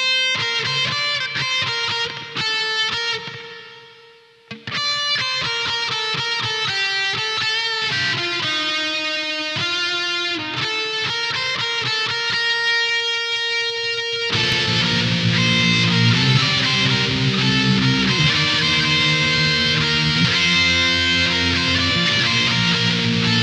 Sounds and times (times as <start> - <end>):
Electric guitar: 0.0 - 23.4
Strum: 14.2 - 23.4.